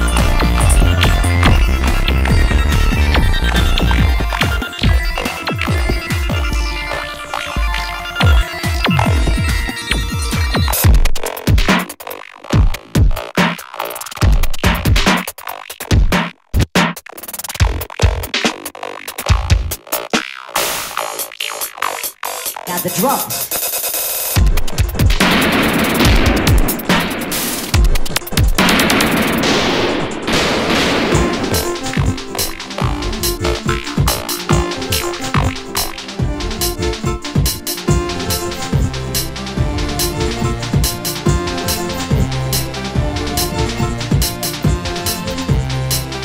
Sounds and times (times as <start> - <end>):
Drum machine: 0.0 - 46.2.